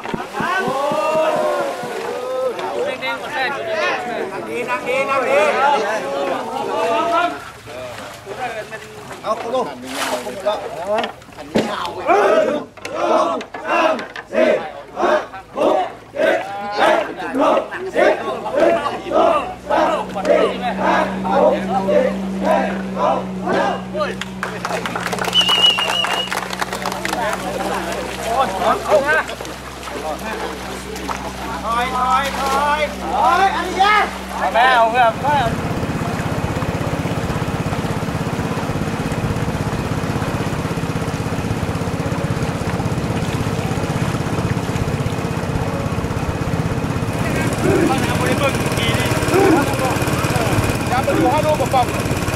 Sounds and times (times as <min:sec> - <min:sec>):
Speech: 0:00.4 - 0:12.6, 0:47.1 - 0:52.0
Vehicle: 0:12.6 - 0:52.3.